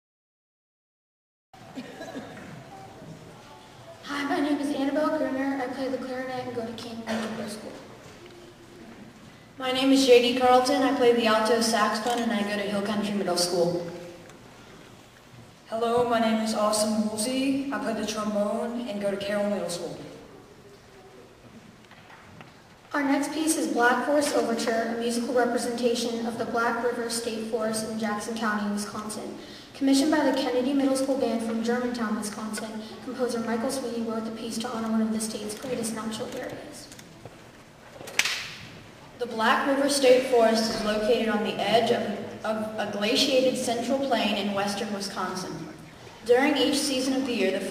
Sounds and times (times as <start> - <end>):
Speech: 2.6 - 8.5, 9.6 - 14.0, 15.7 - 20.3, 22.9 - 37.0, 39.2 - 47.7.